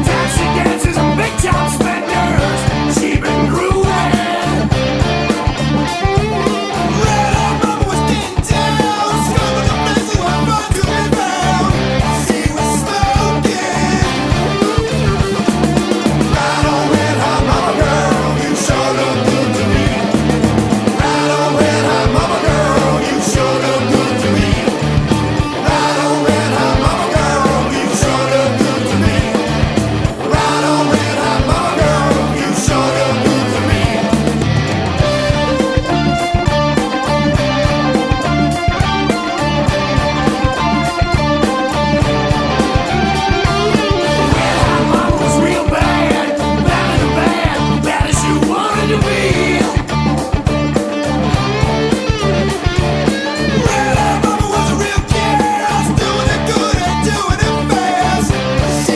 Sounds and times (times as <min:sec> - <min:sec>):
Music: 0:00.0 - 0:58.9.